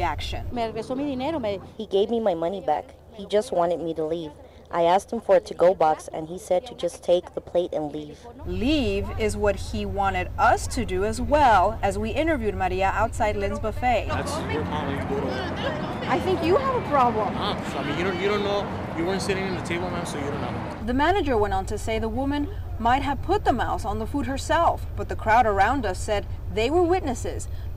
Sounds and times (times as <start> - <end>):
Speech: 0.0 - 27.5.